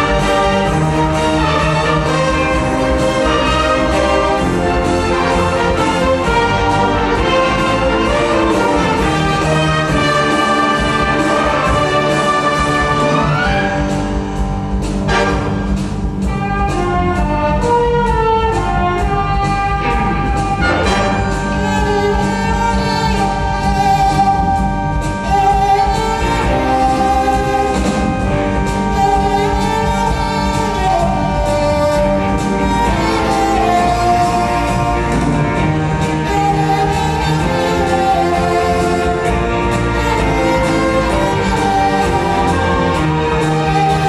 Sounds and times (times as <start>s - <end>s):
Violin, fiddle: 0.0s - 14.3s, 16.3s - 44.0s
Cello: 0.0s - 44.0s.